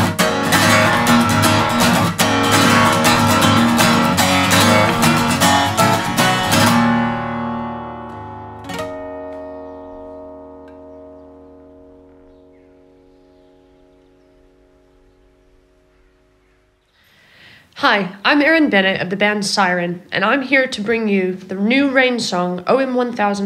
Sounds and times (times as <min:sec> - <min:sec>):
Speech: 0:17.8 - 0:23.4.